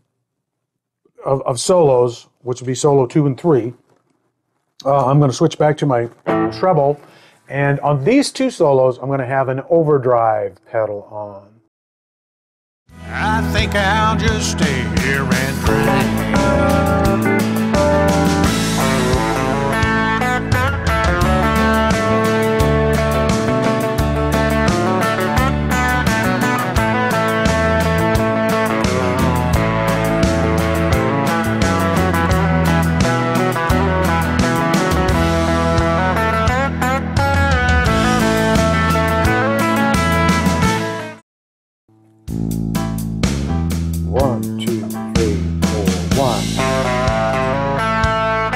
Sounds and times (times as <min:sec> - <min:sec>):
Speech: 0:01.1 - 0:03.8, 0:04.8 - 0:11.6, 0:13.1 - 0:16.4, 0:44.1 - 0:46.6
Guitar: 0:05.9 - 0:07.2, 0:12.9 - 0:41.2, 0:42.0 - 0:48.5.